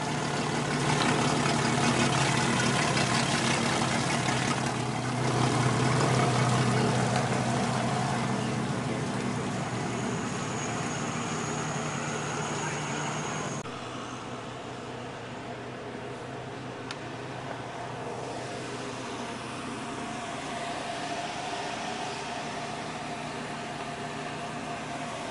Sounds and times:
Motorboat, speedboat: 0:00.0 - 0:14.7.

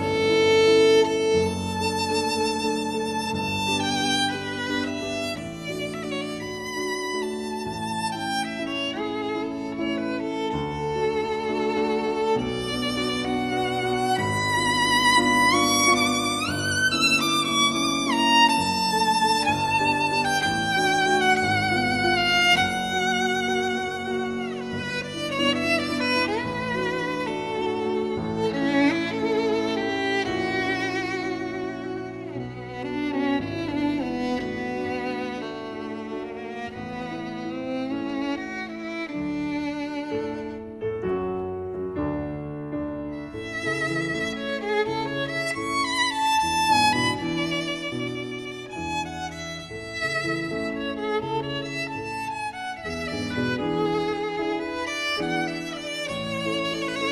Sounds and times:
Violin, fiddle: 0:00.0 - 0:57.1.

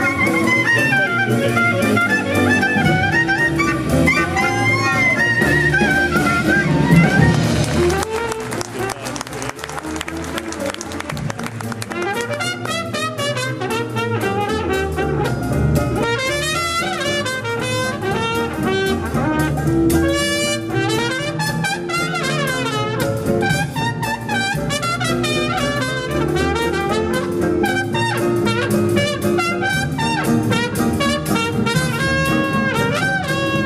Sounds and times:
Jazz: 0:00.0 - 0:33.6.

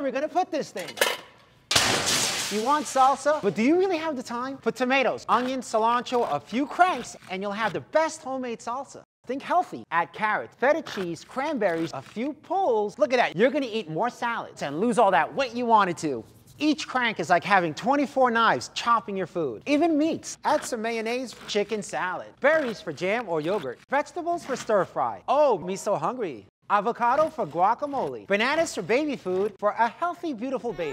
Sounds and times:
Speech: 0:00.0 - 0:01.0, 0:02.5 - 0:30.9.

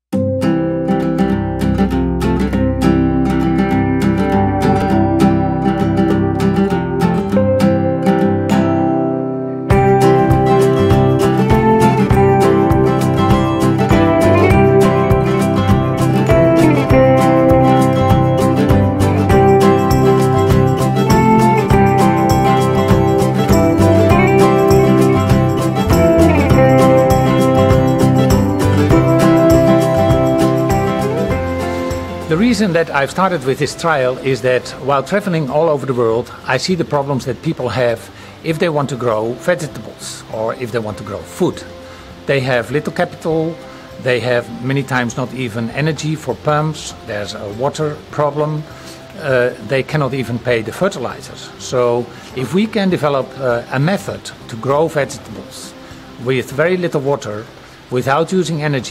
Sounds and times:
Music: 0:00.0 - 0:58.9
Speech: 0:32.3 - 0:41.7, 0:42.3 - 0:48.6, 0:49.2 - 0:58.9.

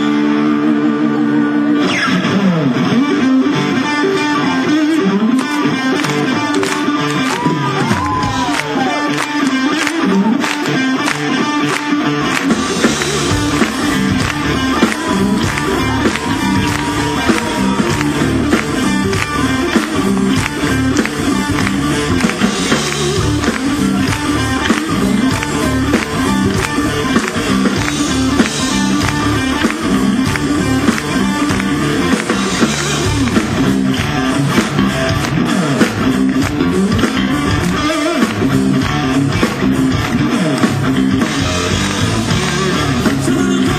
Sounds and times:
Blues: 0:00.0 - 0:43.7
Crowd: 0:00.0 - 0:43.7.

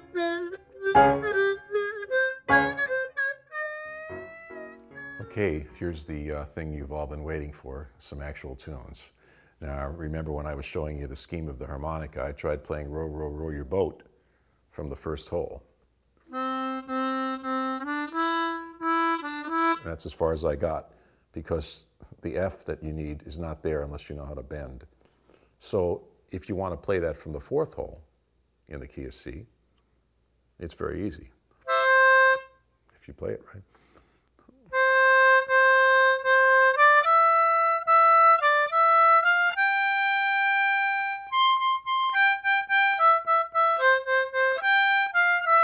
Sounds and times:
Music: 0:00.0 - 0:05.8, 0:16.3 - 0:19.9, 0:31.7 - 0:32.6, 0:34.7 - 0:45.6
Speech: 0:05.2 - 0:14.1, 0:14.7 - 0:15.7, 0:19.8 - 0:24.9, 0:25.6 - 0:28.1, 0:28.7 - 0:29.6, 0:30.6 - 0:31.4, 0:33.0 - 0:33.7.

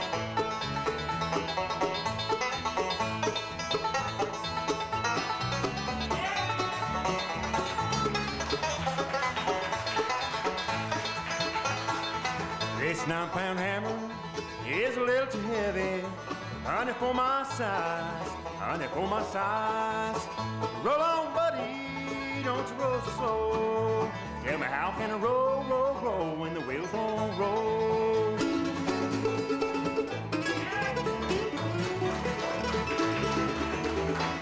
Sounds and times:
Bluegrass: 0:00.0 - 0:34.4.

